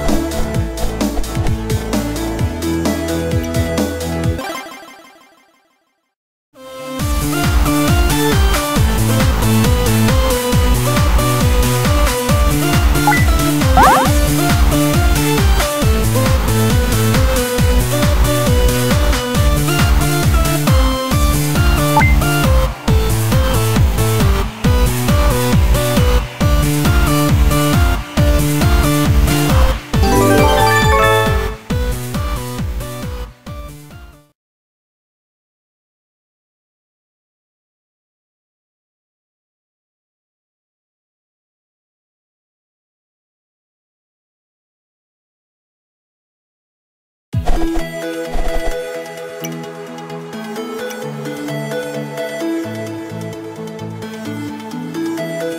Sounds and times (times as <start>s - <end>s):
Music: 0.0s - 4.4s, 6.6s - 34.4s, 47.4s - 55.5s.